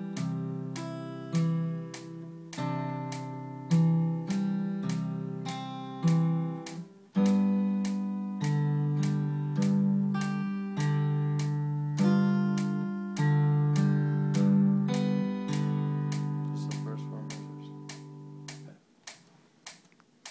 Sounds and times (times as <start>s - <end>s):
Electric guitar: 0.0s - 18.8s
Acoustic guitar: 0.0s - 19.4s.